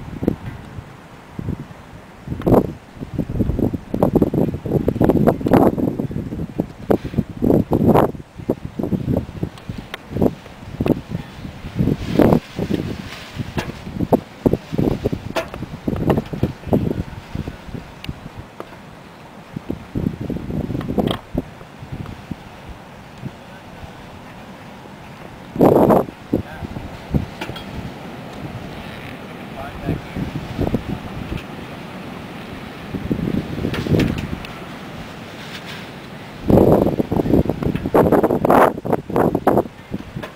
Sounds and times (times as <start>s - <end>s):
Wind noise (microphone): 0.0s - 18.6s, 19.5s - 24.1s, 25.5s - 31.5s, 32.9s - 34.6s, 36.4s - 40.3s.